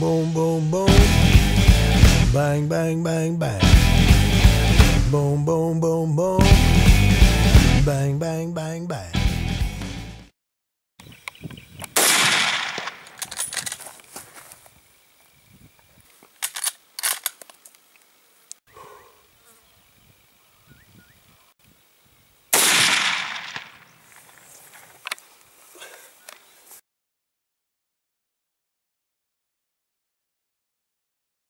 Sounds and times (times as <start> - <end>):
Outside, rural or natural: 0.0 - 10.3, 11.0 - 26.8
Animal: 18.7 - 19.6.